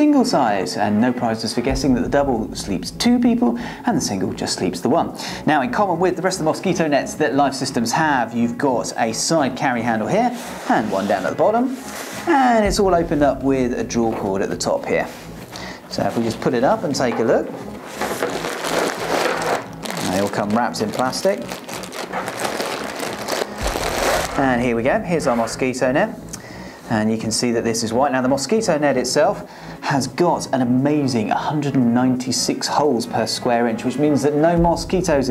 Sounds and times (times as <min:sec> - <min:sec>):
Speech: 0:00.0 - 0:15.1, 0:15.9 - 0:17.6, 0:20.0 - 0:21.5, 0:24.3 - 0:26.2, 0:26.9 - 0:35.3
Music: 0:00.0 - 0:35.3.